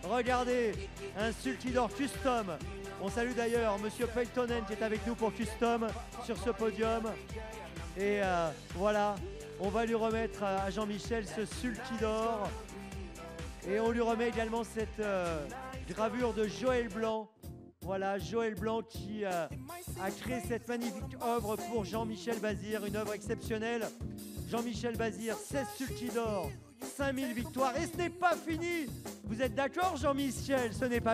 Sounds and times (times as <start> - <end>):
Speech: 0.0 - 7.2, 8.0 - 12.5, 13.6 - 23.9, 24.5 - 31.1
Music: 0.0 - 31.1.